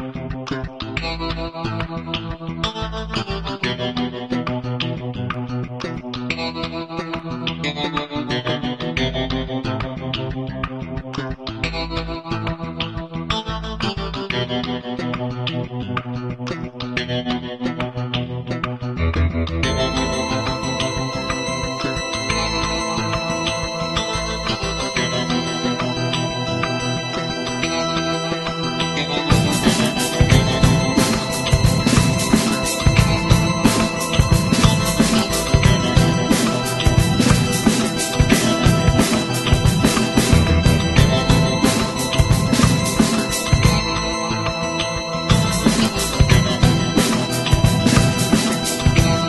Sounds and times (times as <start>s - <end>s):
Music: 0.0s - 49.2s.